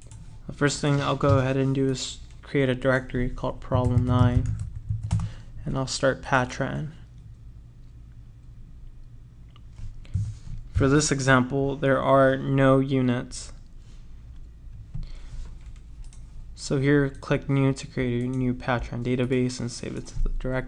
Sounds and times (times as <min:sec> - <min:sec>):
Speech: 0:00.5 - 0:04.6, 0:05.6 - 0:07.0, 0:10.8 - 0:13.6, 0:16.6 - 0:20.6.